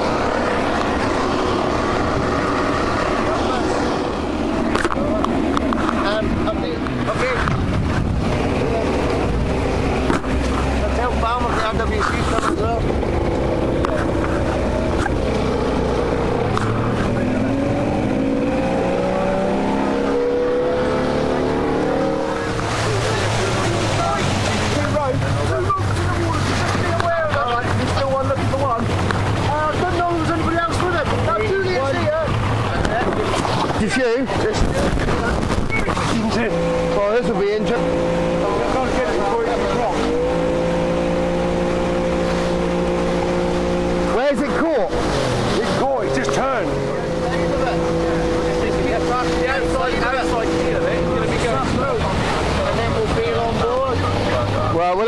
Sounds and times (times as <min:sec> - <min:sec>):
Motorboat, speedboat: 0:00.0 - 0:55.0
Speech: 0:22.6 - 0:33.2, 0:38.4 - 0:40.1, 0:45.6 - 0:55.0.